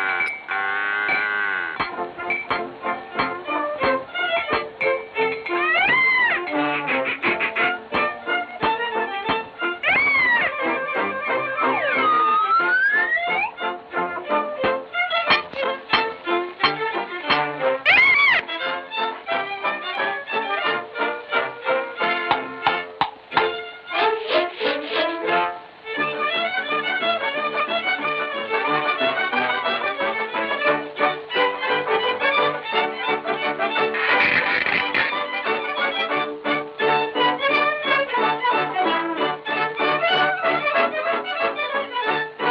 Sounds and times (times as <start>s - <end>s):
Music: 0.0s - 42.5s.